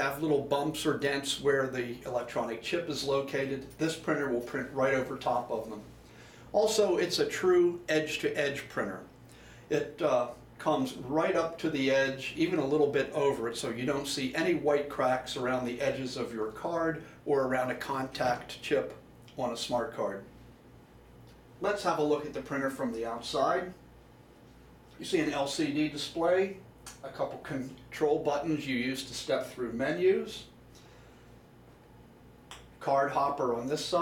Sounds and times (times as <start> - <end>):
Speech: 0.0 - 5.9, 6.5 - 9.1, 9.7 - 20.3, 21.6 - 23.8, 24.9 - 30.6, 32.8 - 34.0.